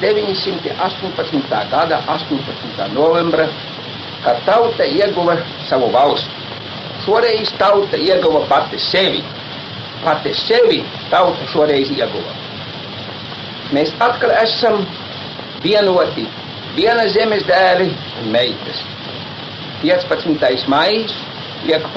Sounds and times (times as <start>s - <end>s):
Speech: 0.0s - 3.6s, 4.2s - 6.3s, 7.0s - 9.3s, 10.0s - 12.4s, 13.7s - 15.0s, 15.6s - 18.9s, 19.8s - 21.9s
Radio: 0.0s - 21.9s.